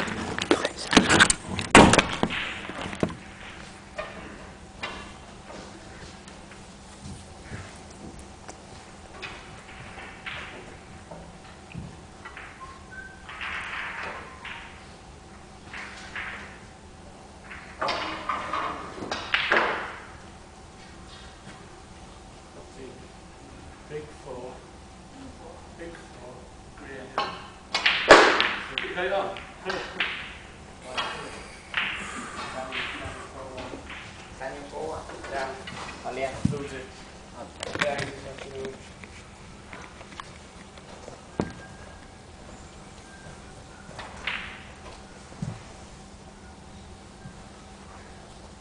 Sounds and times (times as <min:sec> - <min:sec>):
Speech: 0:34.4 - 0:38.8.